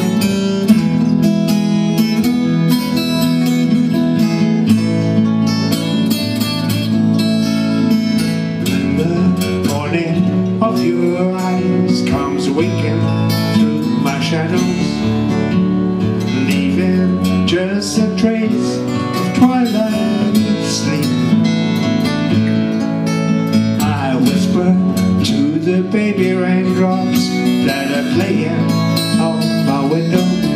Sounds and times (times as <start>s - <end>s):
Bluegrass: 0.0s - 30.5s.